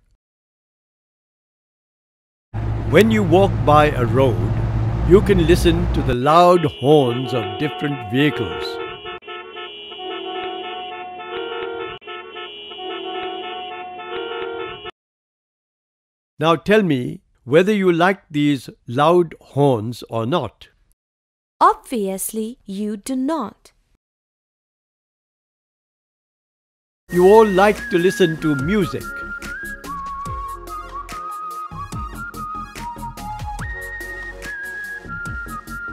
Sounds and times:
Speech: 0:02.9 - 0:04.5, 0:05.1 - 0:08.8, 0:16.4 - 0:20.7, 0:21.6 - 0:23.7, 0:27.1 - 0:29.1
Music: 0:27.1 - 0:35.9.

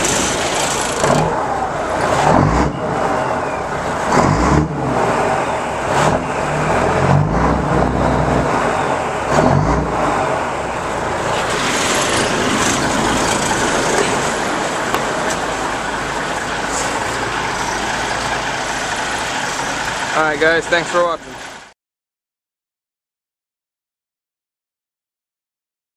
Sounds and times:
Truck: 0:00.0 - 0:21.8.

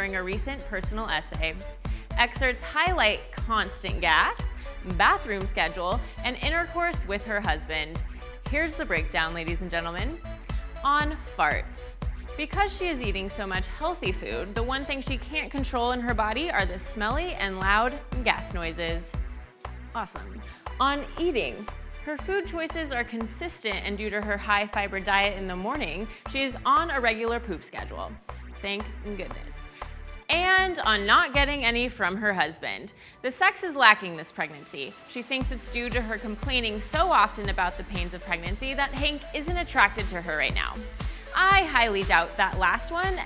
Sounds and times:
Speech: 0:00.0 - 0:10.2, 0:10.8 - 0:19.2, 0:20.0 - 0:29.6, 0:30.3 - 0:40.8, 0:41.4 - 0:43.2
Music: 0:00.0 - 0:43.2.

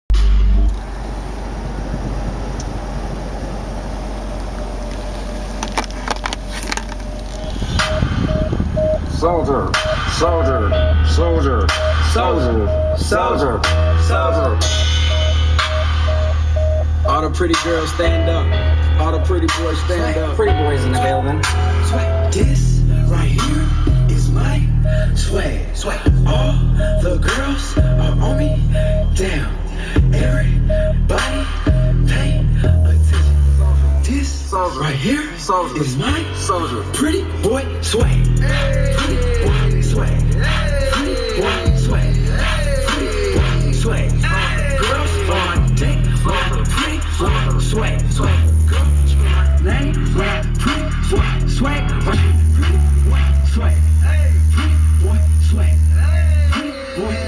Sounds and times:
Car: 0:00.1 - 0:57.2
Speech: 0:09.1 - 0:12.7, 0:17.1 - 0:21.5, 0:34.1 - 0:37.6.

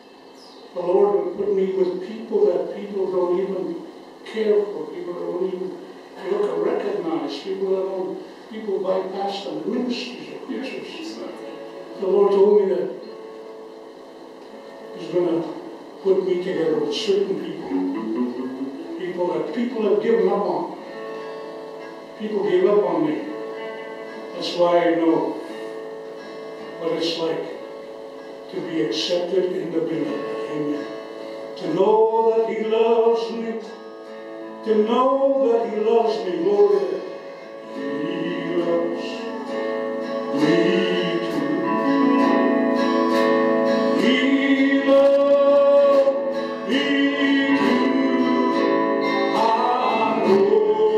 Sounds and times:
Speech: 0:00.0 - 0:13.0, 0:15.0 - 0:20.8, 0:22.2 - 0:23.4, 0:24.4 - 0:25.4, 0:26.8 - 0:27.6, 0:28.5 - 0:30.8
Music: 0:00.0 - 0:50.9.

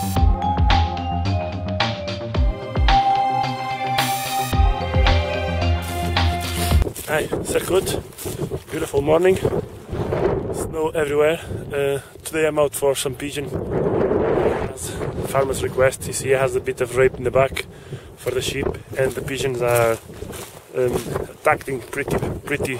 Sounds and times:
Music: 0:00.0 - 0:06.8
Speech: 0:07.1 - 0:08.0, 0:08.7 - 0:09.5, 0:10.5 - 0:13.6, 0:14.7 - 0:20.0, 0:20.7 - 0:22.8.

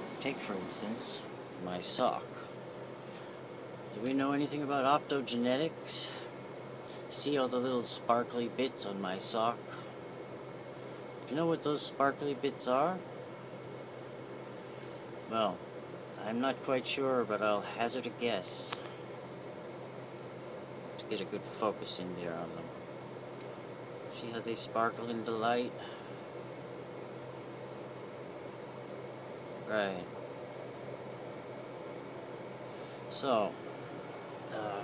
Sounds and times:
Speech: 0:00.2 - 0:02.5, 0:04.0 - 0:06.3, 0:07.1 - 0:09.8, 0:11.3 - 0:13.0, 0:15.3 - 0:15.6, 0:16.2 - 0:18.8, 0:21.0 - 0:22.7, 0:24.2 - 0:25.9, 0:29.7 - 0:30.2, 0:33.1 - 0:33.6, 0:34.5 - 0:34.8.

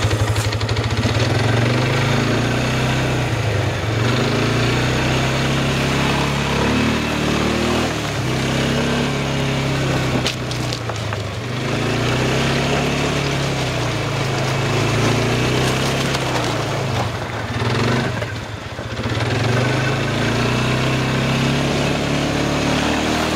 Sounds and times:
Vehicle: 0:00.0 - 0:23.3.

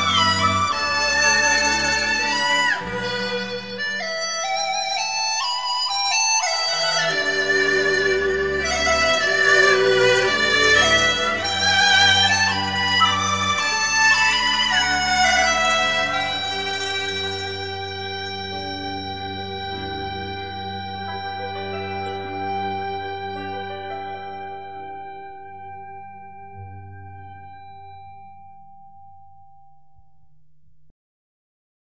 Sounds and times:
Music: 0:00.0 - 0:30.9.

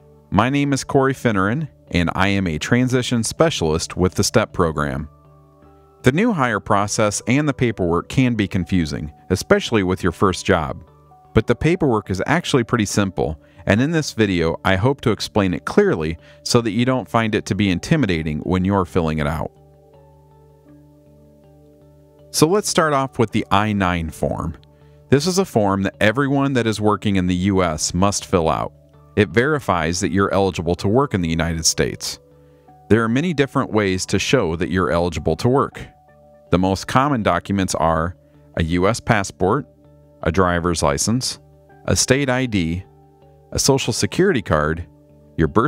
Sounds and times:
Music: 0:00.0 - 0:45.6
Speech: 0:00.3 - 0:05.1, 0:06.0 - 0:10.8, 0:11.4 - 0:19.5, 0:22.3 - 0:32.2, 0:32.9 - 0:35.9, 0:36.5 - 0:42.9, 0:43.5 - 0:45.6.

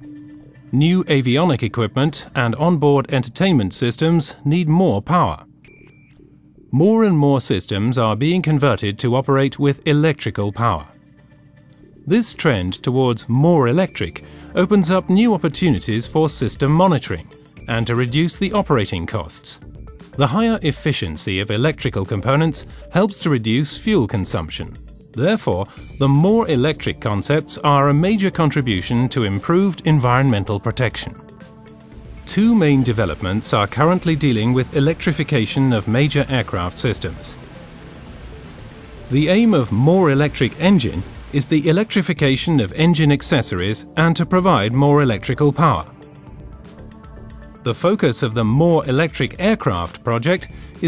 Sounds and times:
Music: 0:00.0 - 0:50.8
Speech: 0:00.7 - 0:05.4, 0:06.7 - 0:10.9, 0:12.1 - 0:19.6, 0:20.2 - 0:31.2, 0:32.3 - 0:37.4, 0:39.1 - 0:45.9, 0:47.7 - 0:50.8.

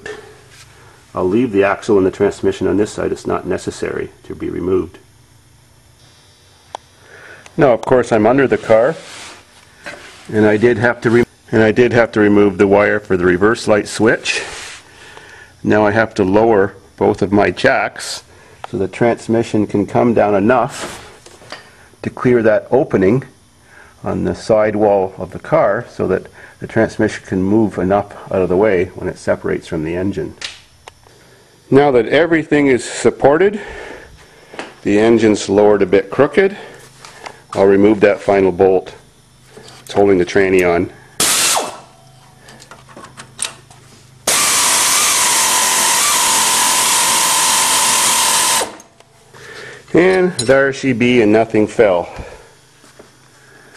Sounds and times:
Speech: 0:01.2 - 0:05.1, 0:07.6 - 0:09.1, 0:10.3 - 0:14.6, 0:15.6 - 0:20.8, 0:22.0 - 0:23.4, 0:24.0 - 0:30.4, 0:31.7 - 0:33.7, 0:34.8 - 0:36.8, 0:37.5 - 0:39.0, 0:39.9 - 0:41.0, 0:49.9 - 0:52.4.

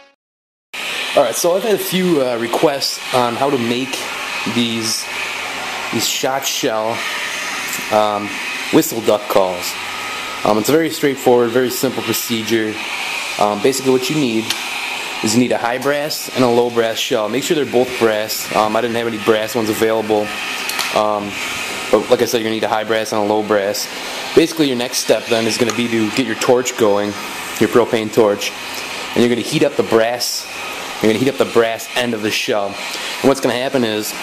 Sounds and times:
Speech: 0:01.2 - 0:05.1, 0:05.9 - 0:07.0, 0:07.9 - 0:09.8, 0:10.4 - 0:14.6, 0:15.2 - 0:28.6, 0:29.2 - 0:34.2.

